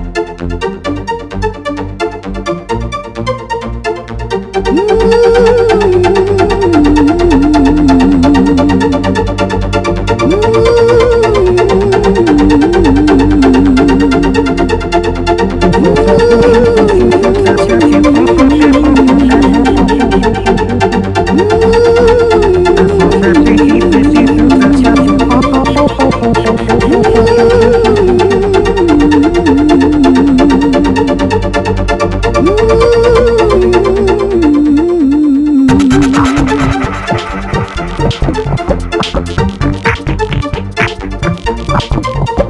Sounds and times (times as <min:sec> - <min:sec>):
Electronica: 0:03.9 - 0:42.4.